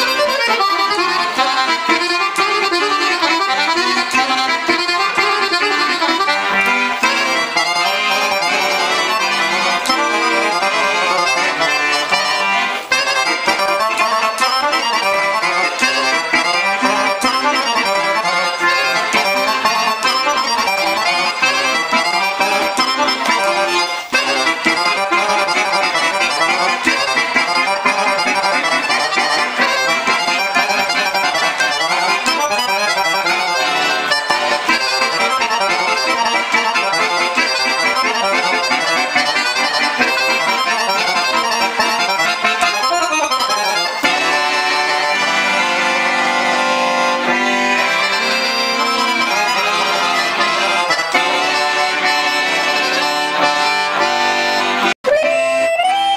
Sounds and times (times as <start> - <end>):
Music: 0.0 - 56.1.